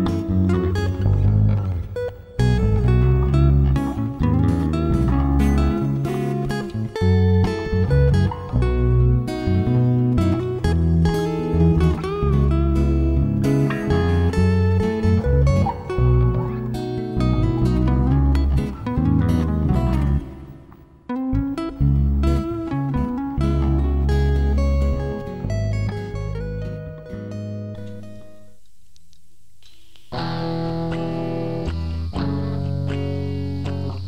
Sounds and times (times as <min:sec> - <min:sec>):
Music: 0:00.0 - 0:34.0.